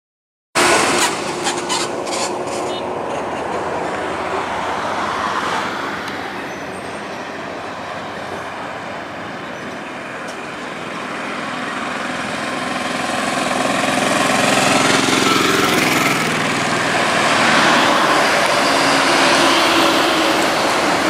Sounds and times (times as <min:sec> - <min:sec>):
Bus: 0:00.6 - 0:21.0.